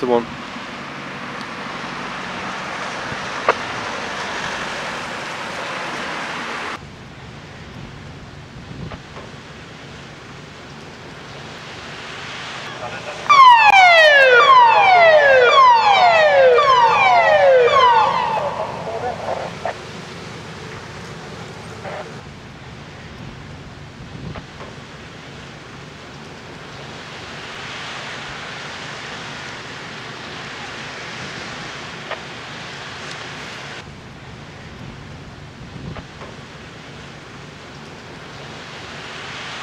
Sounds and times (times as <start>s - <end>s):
Speech: 0.0s - 0.3s, 12.7s - 13.3s, 18.6s - 19.8s.